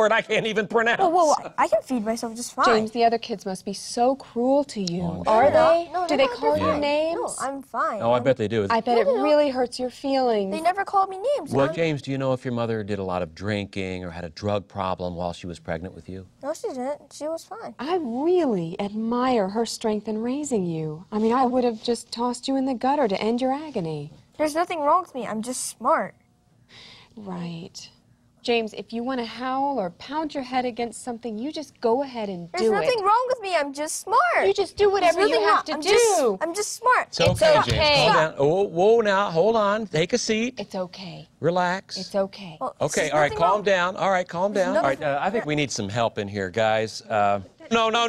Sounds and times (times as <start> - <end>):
Female speech, woman speaking: 1.0 - 12.0, 16.4 - 26.2, 27.2 - 38.4, 40.6 - 41.3, 42.0 - 45.5.